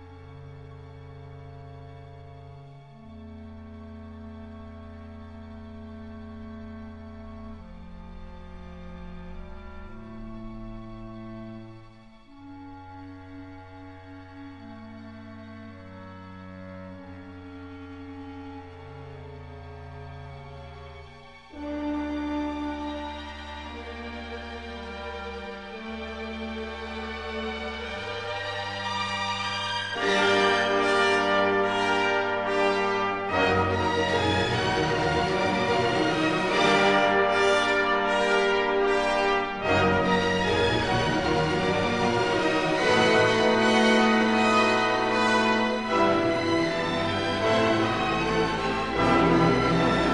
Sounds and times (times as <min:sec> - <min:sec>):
Music: 0:00.0 - 0:50.1.